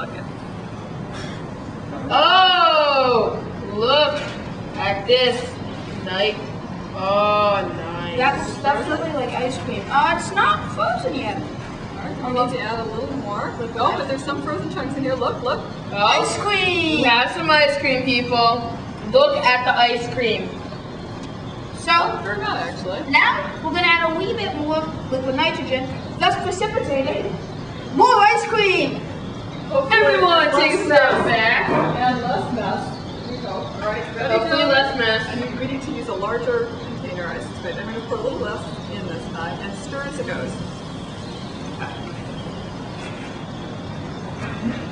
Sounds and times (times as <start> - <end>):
Inside, large room or hall: 0.0 - 44.9.